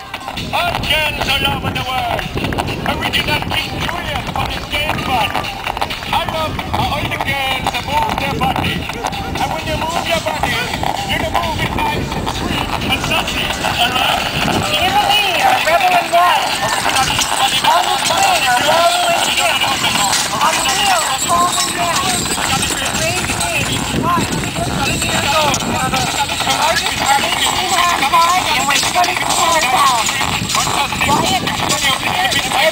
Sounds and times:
Music: 0.0 - 32.7
Speech: 0.0 - 32.7.

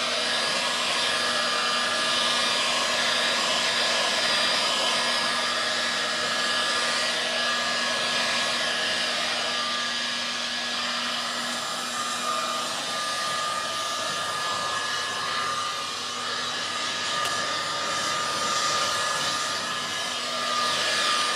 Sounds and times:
Hair dryer: 0.0 - 21.3.

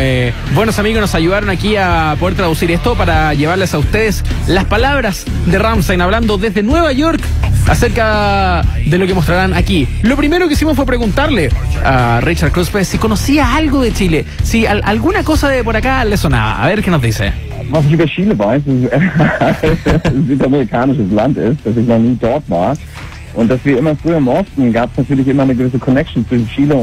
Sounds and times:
Music: 0.0 - 26.8
Speech: 0.0 - 26.8.

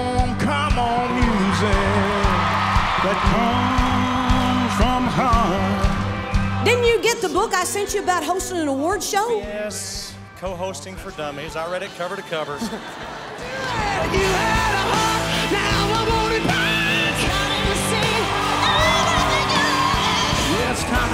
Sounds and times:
Music: 0.0 - 21.1.

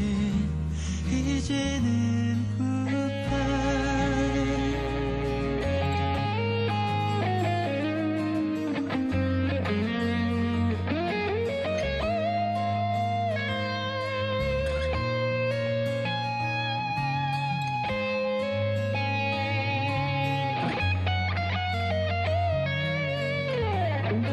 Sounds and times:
Steel guitar, slide guitar: 0.0 - 24.3.

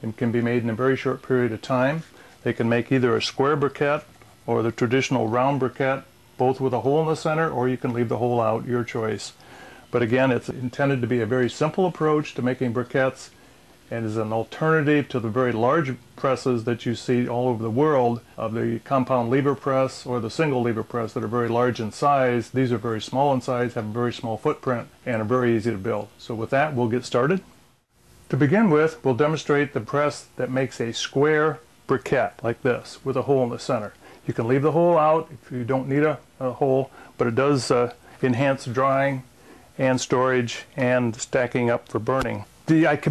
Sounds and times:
Speech: 0.0 - 27.6, 28.3 - 43.1.

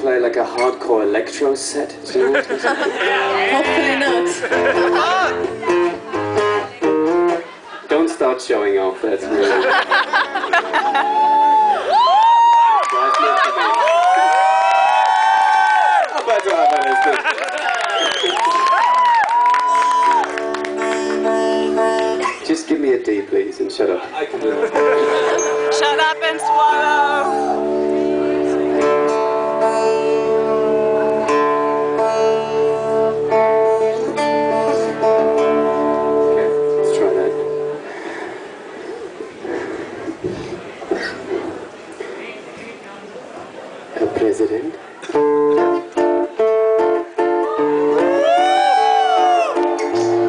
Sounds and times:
Music: 3.2 - 7.5, 19.6 - 22.4, 24.5 - 38.0, 45.1 - 50.2.

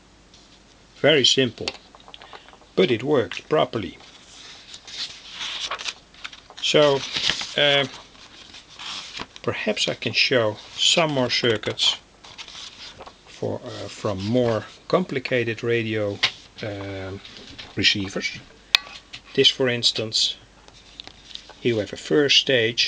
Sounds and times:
Inside, small room: 0.0 - 22.8
Speech: 1.0 - 1.8, 2.8 - 4.0, 6.6 - 7.0, 7.6 - 8.0, 9.5 - 12.0, 13.4 - 18.5, 19.4 - 20.4, 21.6 - 22.8.

